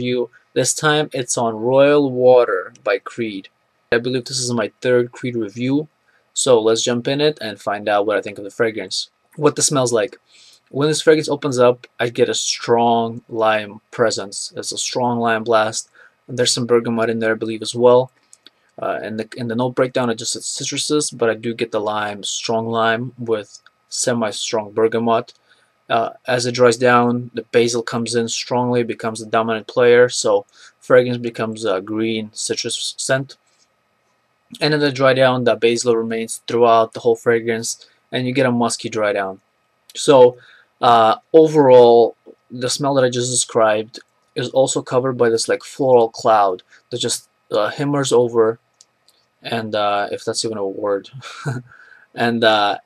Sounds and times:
Speech: 0.0s - 18.1s, 18.8s - 33.4s, 34.6s - 48.6s, 49.4s - 52.8s.

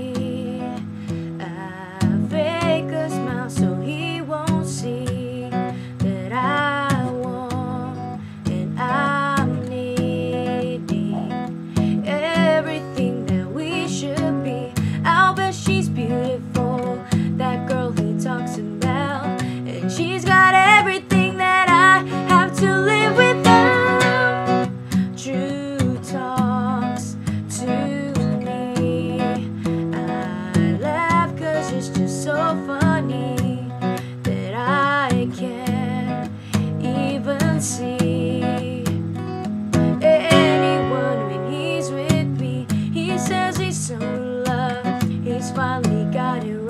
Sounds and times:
Strum: 0.0s - 46.5s
Acoustic guitar: 0.0s - 46.6s.

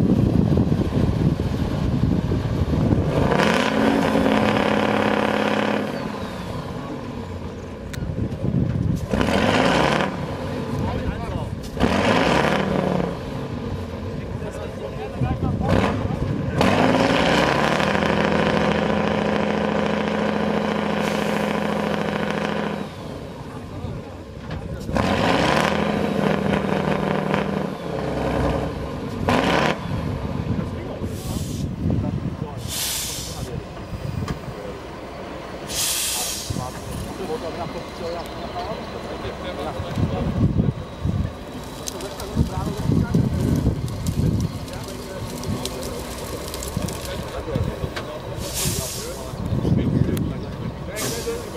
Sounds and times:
Truck: 0.0s - 51.5s.

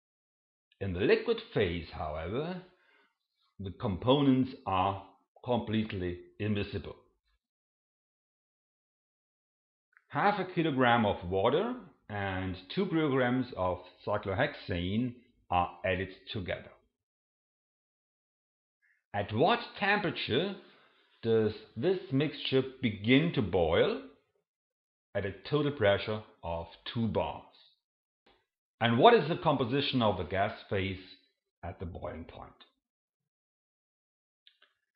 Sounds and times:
Speech: 0.8s - 2.7s, 3.6s - 7.0s, 10.1s - 16.8s, 19.2s - 20.6s, 21.2s - 24.2s, 25.2s - 27.7s, 28.8s - 32.6s.

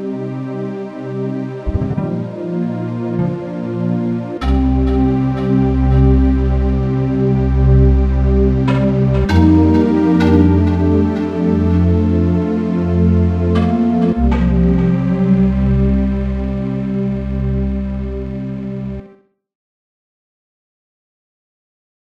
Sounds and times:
Music: 0.0s - 19.5s.

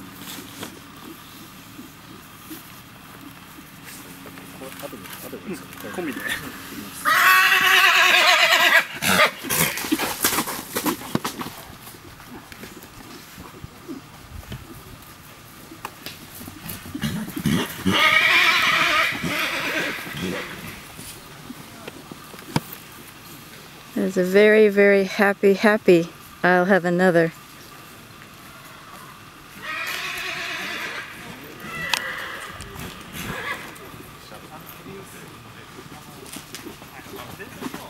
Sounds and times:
Horse: 0.0s - 26.7s, 27.4s - 37.8s
Outside, rural or natural: 0.0s - 37.8s.

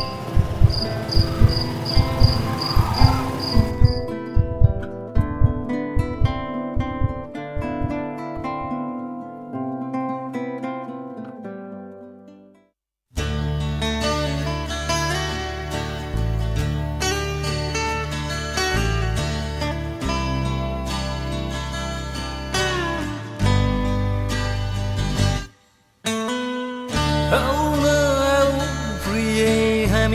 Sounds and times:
Music: 0.0s - 30.1s.

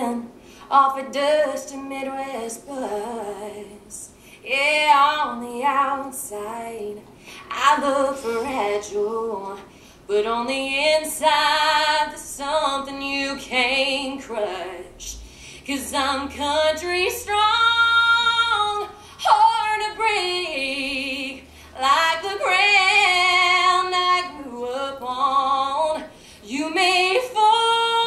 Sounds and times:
Inside, large room or hall: 0.0s - 28.0s.

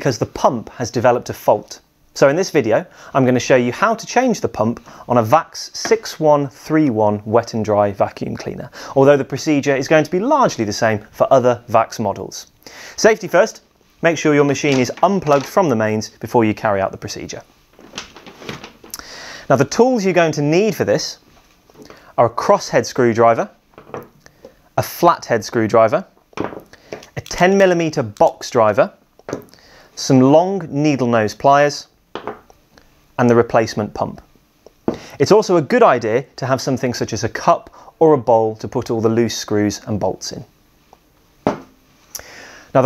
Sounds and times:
Speech: 0.0s - 17.5s, 19.5s - 21.2s, 22.2s - 23.6s, 24.8s - 26.1s, 27.2s - 29.0s, 30.0s - 31.9s, 33.2s - 34.3s, 35.2s - 40.5s.

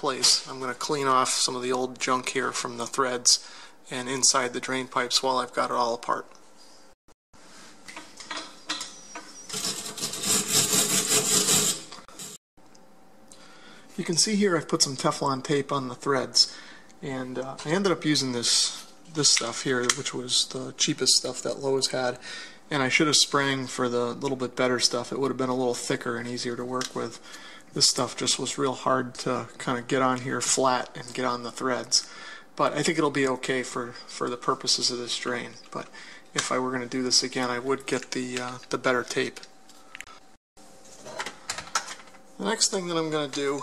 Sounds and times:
Filing (rasp): 9.5s - 12.4s
Rub: 10.1s - 12.4s.

